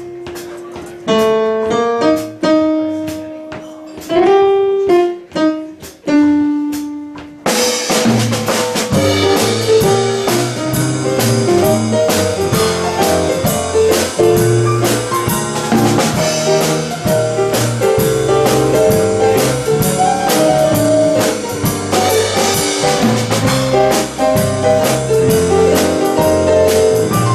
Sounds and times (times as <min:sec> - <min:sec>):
Music: 0:00.0 - 0:27.3.